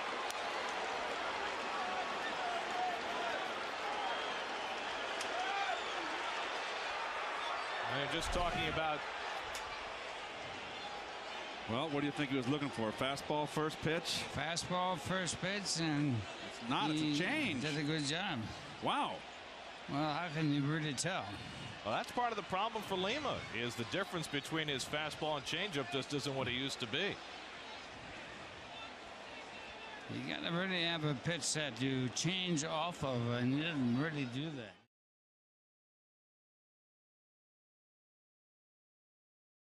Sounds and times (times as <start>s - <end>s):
Speech: 7.9s - 9.0s, 11.7s - 19.2s, 19.9s - 27.2s, 30.1s - 34.9s.